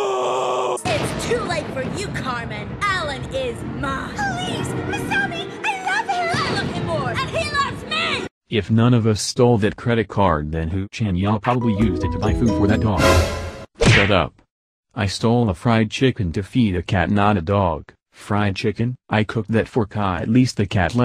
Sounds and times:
Speech synthesizer: 0.8s - 13.3s, 13.9s - 14.4s, 15.0s - 21.0s
Music: 11.5s - 13.7s.

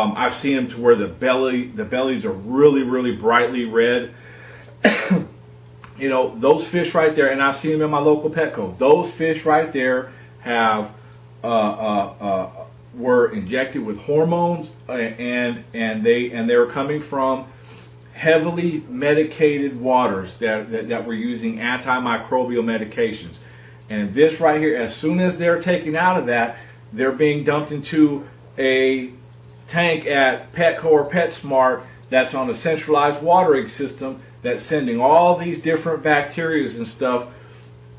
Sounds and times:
Speech: 0.0s - 4.2s, 6.0s - 17.5s, 18.2s - 37.3s
Inside, small room: 0.0s - 37.9s.

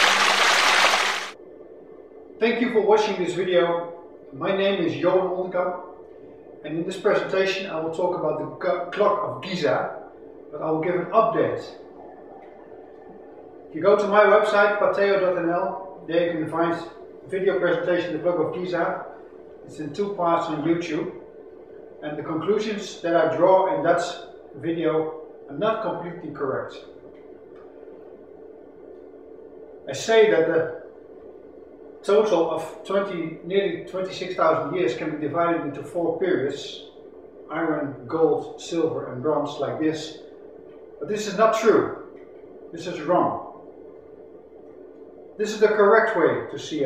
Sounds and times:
Speech: 2.4s - 5.9s, 6.6s - 12.5s, 13.7s - 19.1s, 19.7s - 21.2s, 22.0s - 26.9s, 29.9s - 30.9s, 32.0s - 40.3s, 41.0s - 42.1s, 42.8s - 43.6s, 45.4s - 46.8s.

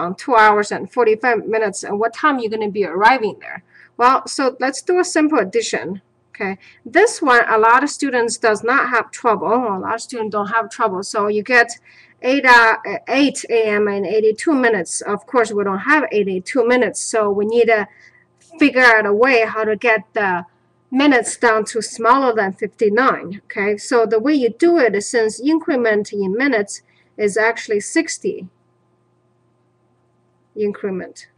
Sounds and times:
Speech: 0.0s - 28.6s, 30.6s - 31.3s.

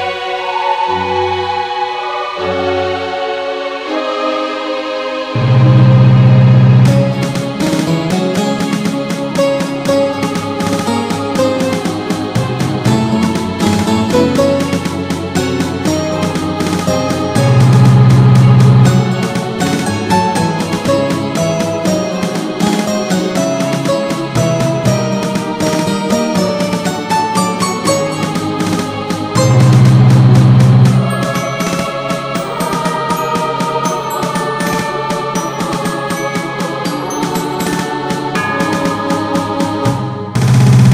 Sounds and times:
Video game music: 2.2s - 40.9s.

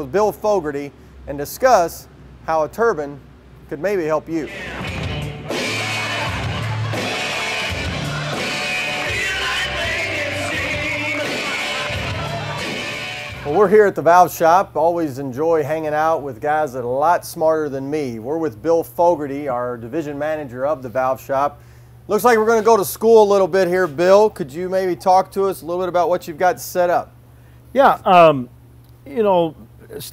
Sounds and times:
Speech: 0.0s - 4.5s, 13.5s - 27.1s, 27.8s - 30.1s.

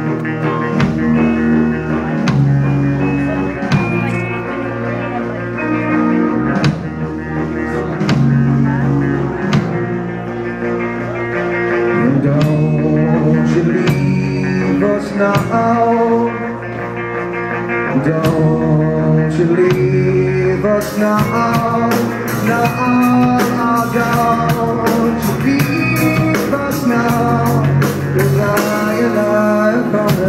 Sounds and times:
Music: 0.0s - 30.2s
Speech: 2.1s - 6.0s.

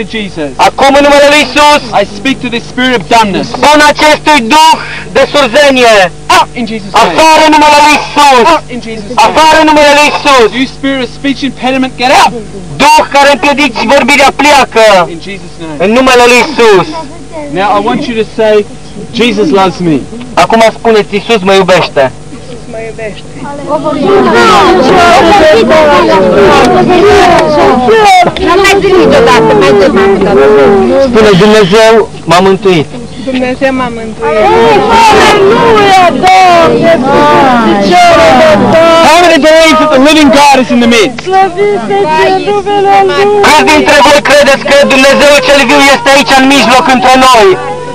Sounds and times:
Male speech, man speaking: 0.0s - 22.2s, 24.0s - 32.9s, 34.2s - 41.2s, 43.1s - 47.7s.

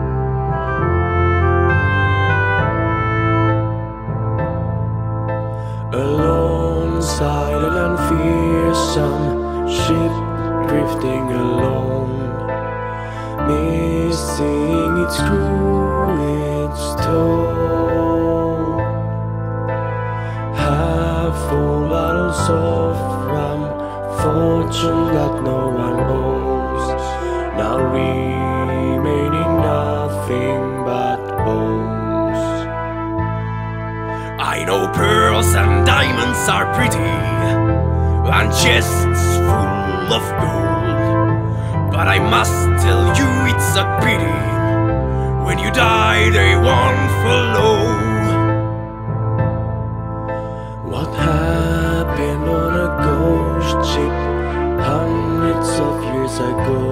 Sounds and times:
Music: 0.0s - 56.9s.

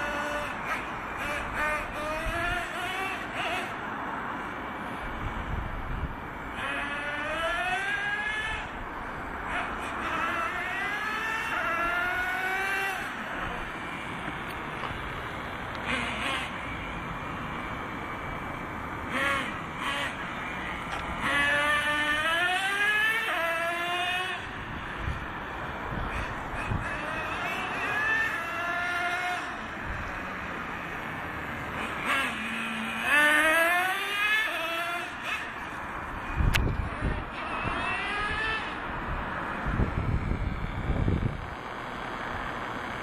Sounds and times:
Accelerating, revving, vroom: 0.0s - 3.8s, 6.5s - 8.8s, 9.5s - 14.0s, 15.8s - 16.8s, 19.1s - 24.6s, 26.1s - 40.0s
Vehicle: 0.0s - 43.0s.

